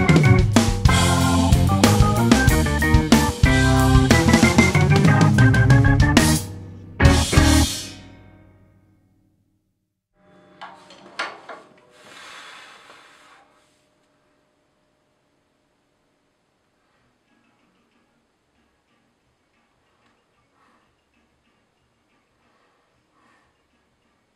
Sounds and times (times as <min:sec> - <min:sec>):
Drum: 0:00.0 - 0:08.0
Drum kit: 0:00.0 - 0:08.2
Inside, small room: 0:00.0 - 0:24.3.